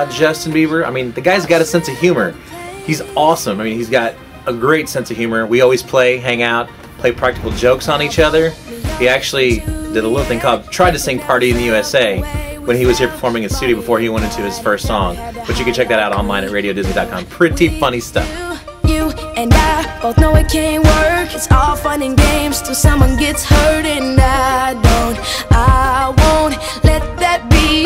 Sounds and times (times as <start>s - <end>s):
Speech: 0.0s - 18.3s
Music: 0.0s - 27.8s.